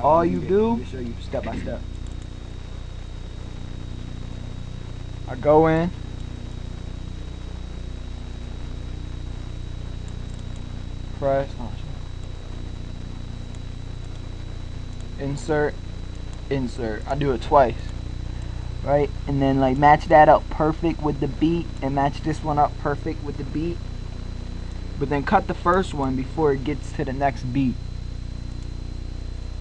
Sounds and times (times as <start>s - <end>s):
Speech: 0.0s - 1.8s, 5.3s - 6.0s, 11.2s - 12.0s, 15.2s - 15.8s, 16.5s - 17.9s, 18.8s - 23.8s, 25.0s - 27.8s.